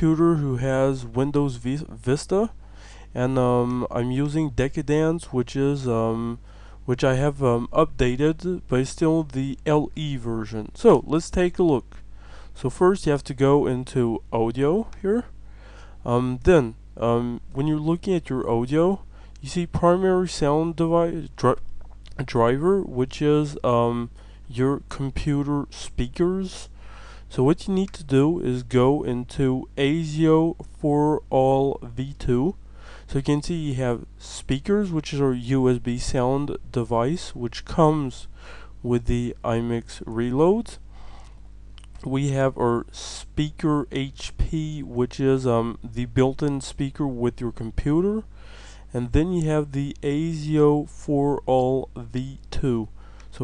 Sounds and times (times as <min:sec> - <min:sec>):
Speech: 0:00.0 - 0:02.6, 0:03.2 - 0:12.0, 0:12.6 - 0:15.3, 0:16.0 - 0:40.8, 0:42.0 - 0:48.3, 0:48.9 - 0:53.4.